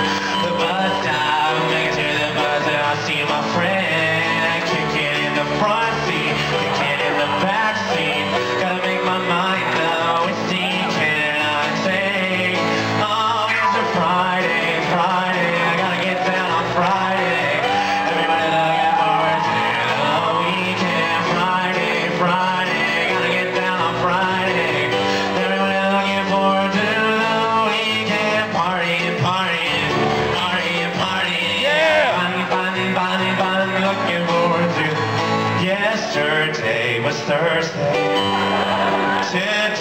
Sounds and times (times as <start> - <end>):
Male singing: 0.0 - 38.1, 39.1 - 39.8
Music: 0.0 - 39.8.